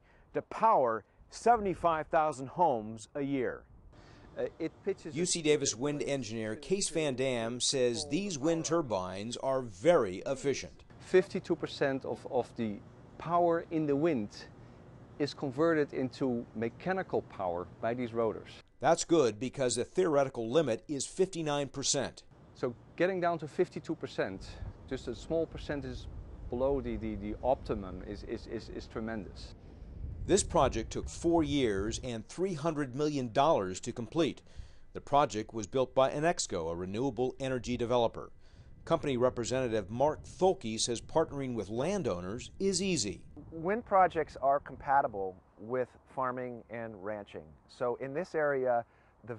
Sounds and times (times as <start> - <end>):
Speech: 0.4 - 3.6, 4.4 - 14.5, 15.2 - 29.6, 30.3 - 34.4, 35.0 - 38.3, 38.9 - 49.3.